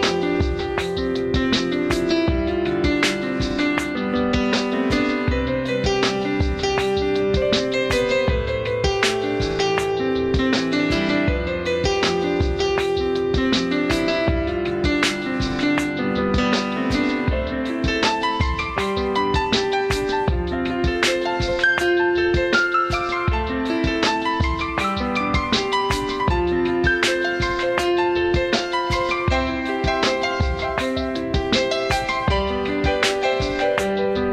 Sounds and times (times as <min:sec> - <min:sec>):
Tender music: 0:00.0 - 0:34.3.